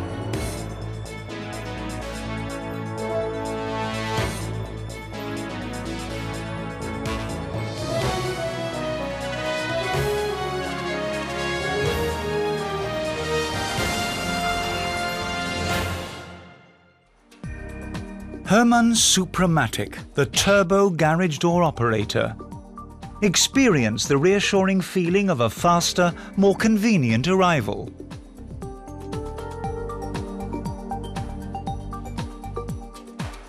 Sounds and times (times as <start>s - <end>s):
Music: 0.0s - 33.4s
Speech: 18.5s - 22.4s, 23.2s - 27.9s.